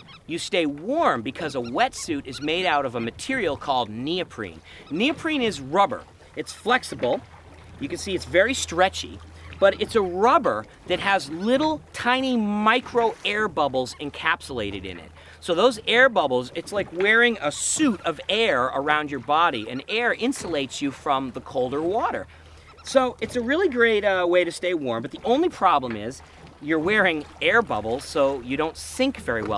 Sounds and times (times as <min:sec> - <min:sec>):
Speech: 0:00.3 - 0:07.2, 0:07.8 - 0:22.3, 0:22.9 - 0:29.5.